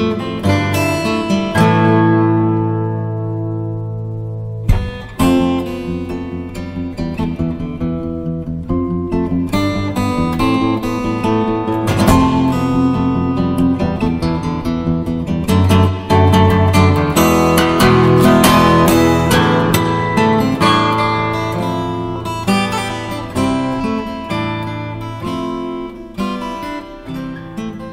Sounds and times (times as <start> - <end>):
Acoustic guitar: 0.0 - 27.9.